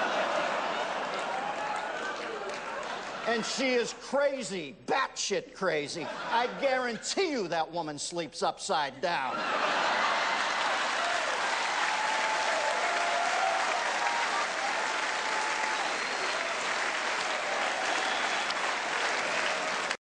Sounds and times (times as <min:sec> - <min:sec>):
Applause: 0:00.0 - 0:03.6, 0:10.2 - 0:20.0.